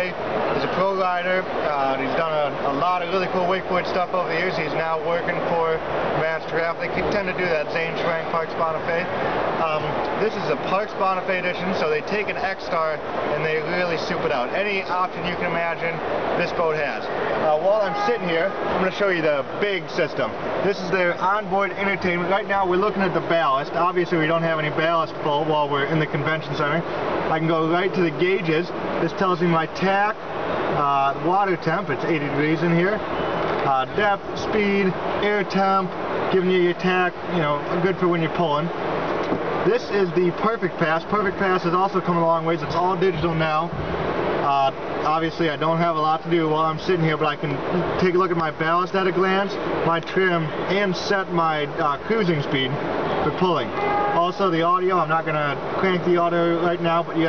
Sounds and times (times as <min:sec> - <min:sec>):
Speech: 0:00.0 - 0:30.2, 0:30.8 - 0:33.0, 0:33.6 - 0:38.7, 0:39.6 - 0:43.8, 0:44.4 - 0:57.2.